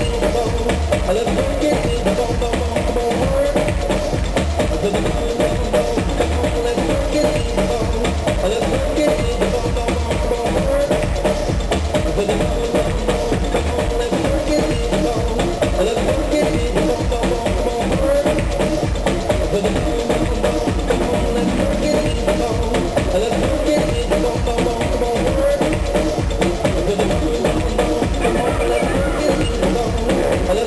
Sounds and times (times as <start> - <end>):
Rhythm and blues: 0.0 - 30.6
Exciting music: 18.6 - 30.6.